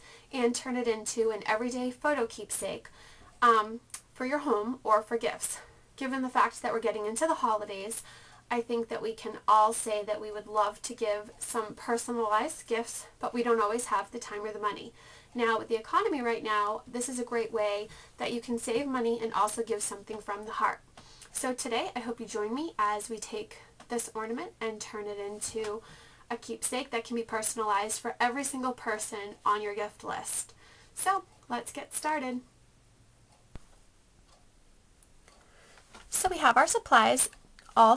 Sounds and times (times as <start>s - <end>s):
Speech: 0.3s - 20.8s, 21.4s - 32.5s, 36.1s - 37.9s.